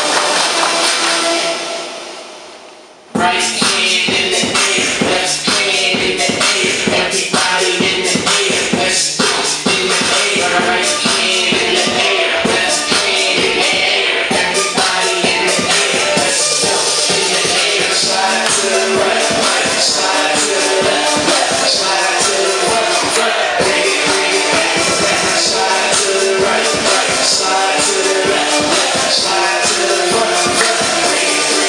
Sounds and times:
Dance music: 0:00.0 - 0:02.6, 0:03.2 - 0:31.6.

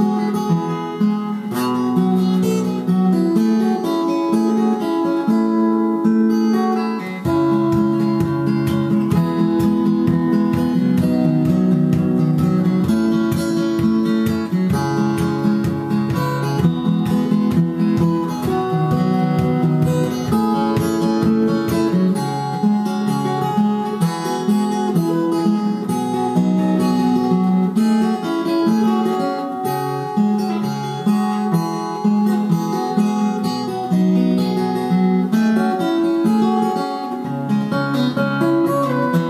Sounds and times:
Guitar: 0:00.0 - 0:39.3.

